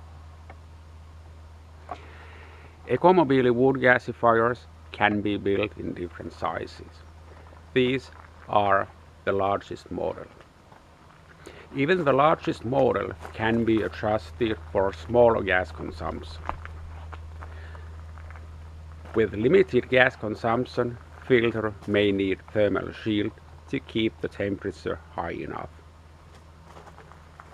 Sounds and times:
Outside, rural or natural: 0.0 - 27.5
Speech: 2.9 - 7.0, 7.8 - 10.4, 11.7 - 16.5, 19.1 - 25.8.

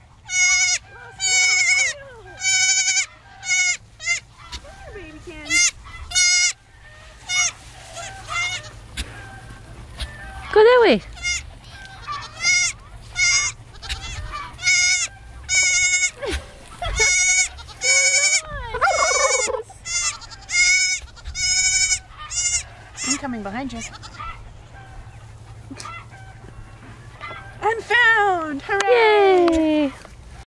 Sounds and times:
Bleat: 0.3 - 4.3, 5.5 - 6.6, 7.3 - 8.8, 11.1 - 16.2, 17.0 - 24.4.

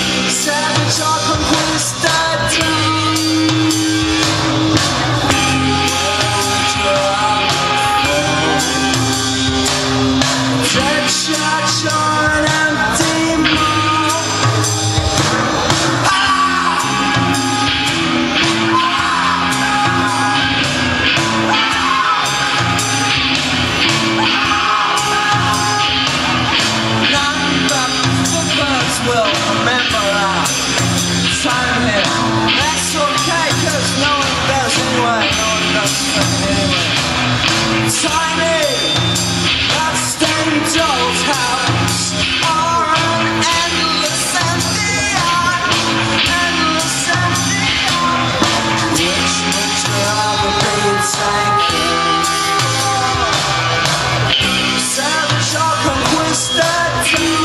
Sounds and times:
Musical instrument: 0.0 - 57.4
Rock and roll: 0.0 - 57.4
Singing: 0.0 - 57.4.

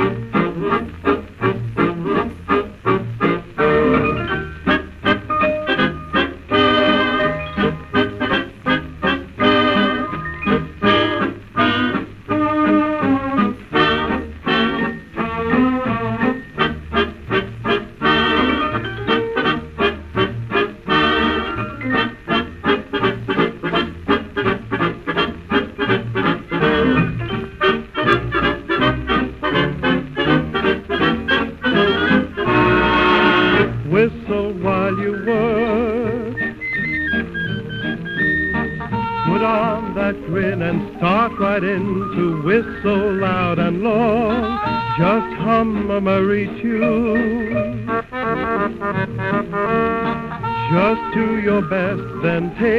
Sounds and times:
Music: 0.0 - 52.7.

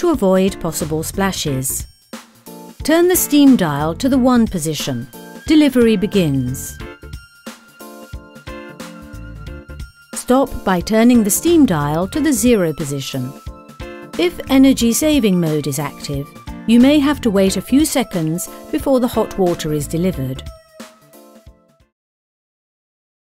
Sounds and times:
Speech: 0.0 - 1.9, 2.9 - 6.8, 10.2 - 13.4, 14.2 - 20.5
Music: 0.0 - 22.0.

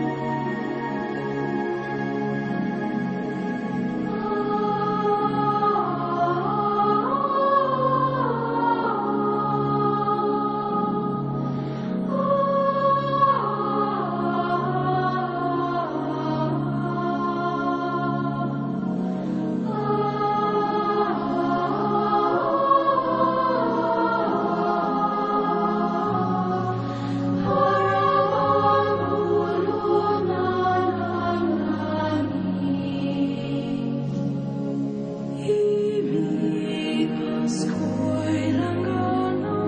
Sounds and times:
Music: 0.0 - 39.6.

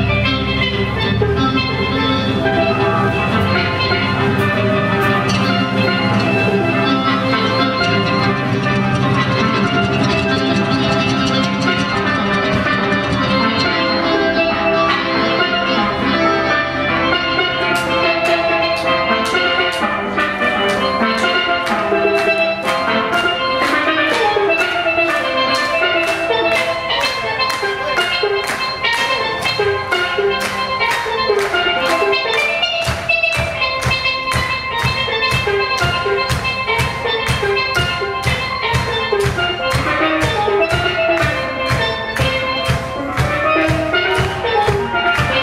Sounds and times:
Drum: 0.0 - 45.4
Steelpan: 0.0 - 45.4.

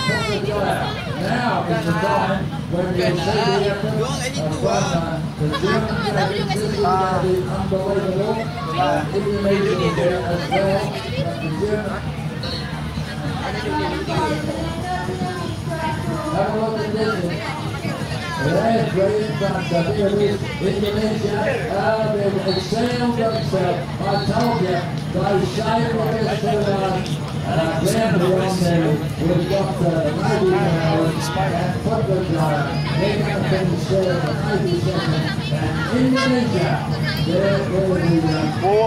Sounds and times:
Speech: 0.0 - 38.8.

